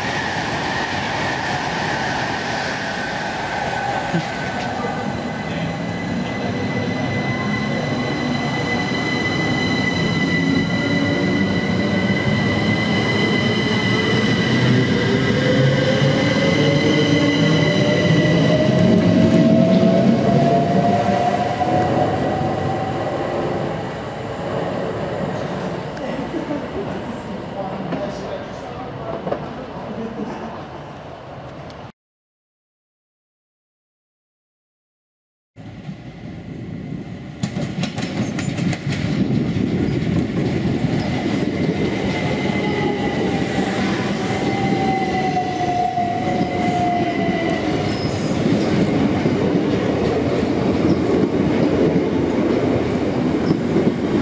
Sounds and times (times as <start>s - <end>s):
Railroad car, train wagon: 0.0s - 15.7s, 25.3s - 31.9s, 35.6s - 54.2s
Train: 0.0s - 31.9s, 35.6s - 54.2s.